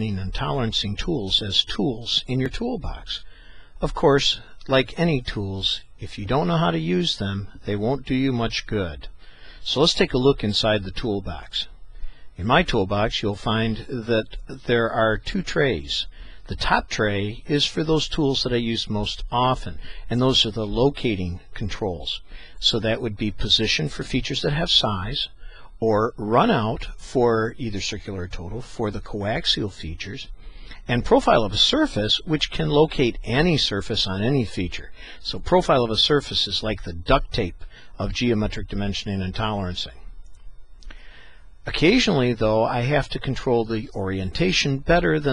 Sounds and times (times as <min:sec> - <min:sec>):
Speech: 0:00.0 - 0:11.8, 0:12.4 - 0:40.1, 0:41.6 - 0:45.3.